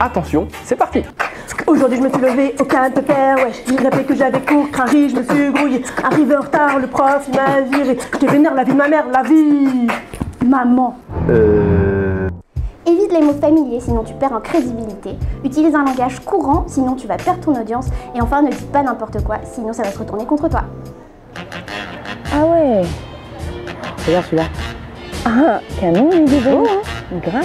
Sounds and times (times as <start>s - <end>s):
Music: 0.0s - 10.3s, 12.2s - 27.4s.